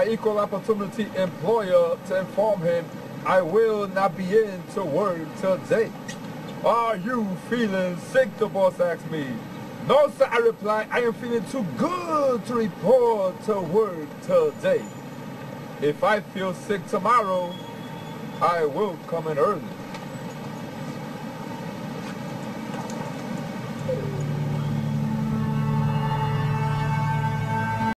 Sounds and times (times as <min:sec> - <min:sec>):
Speech: 0:00.0 - 0:06.0, 0:06.6 - 0:14.9, 0:15.8 - 0:17.6, 0:18.4 - 0:19.8
Music: 0:23.9 - 0:27.9.